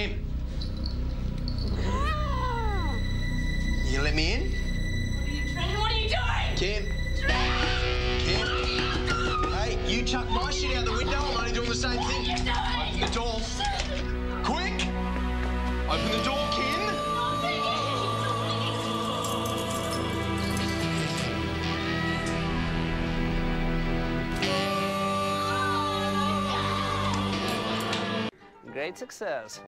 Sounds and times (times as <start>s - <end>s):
Music: 0.0s - 29.6s.